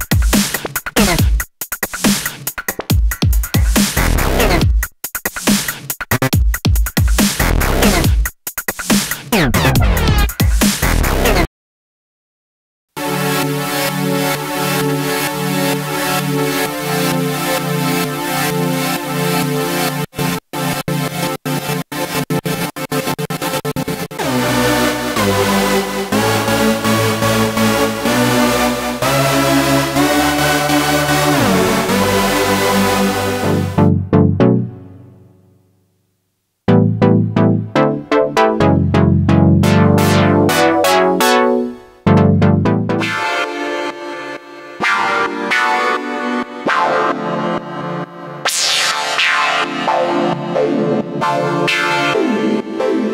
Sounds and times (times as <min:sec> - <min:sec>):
Music: 0:00.0 - 0:11.5, 0:12.9 - 0:53.1.